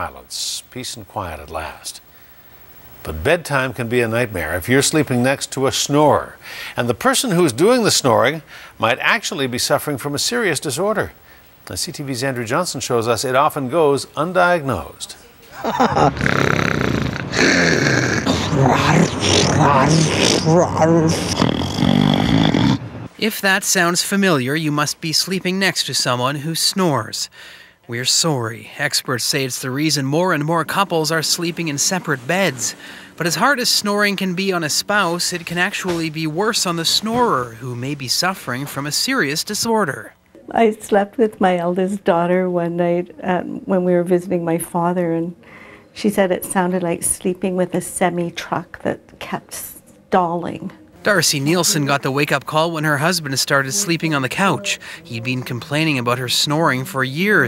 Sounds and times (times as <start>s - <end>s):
Speech: 0.0s - 2.0s, 18.3s - 21.4s, 23.2s - 27.3s, 27.9s - 45.4s, 46.0s - 57.4s
Snoring: 15.8s - 22.8s.